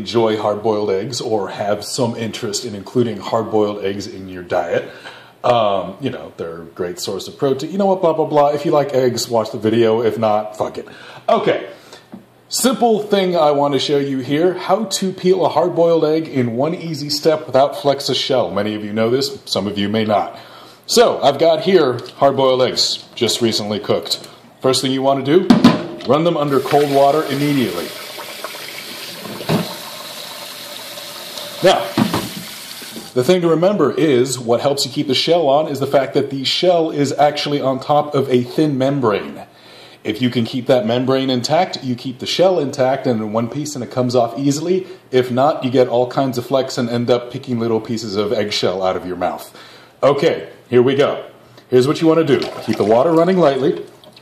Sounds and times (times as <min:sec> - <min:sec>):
Speech: 0:00.0 - 0:11.8, 0:12.5 - 0:28.0, 0:31.6 - 0:32.0, 0:33.1 - 0:53.9
Sink (filling or washing): 0:26.4 - 0:33.2, 0:52.3 - 0:54.2.